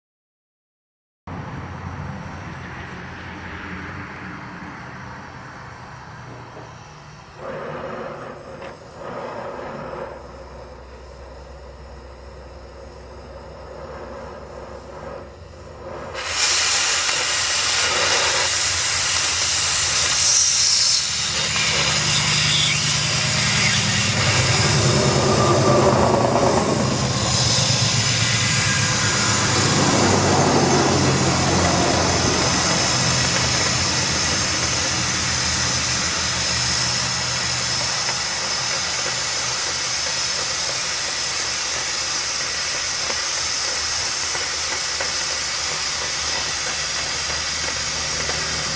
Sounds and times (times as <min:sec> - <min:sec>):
Hiss: 0:06.4 - 0:48.7.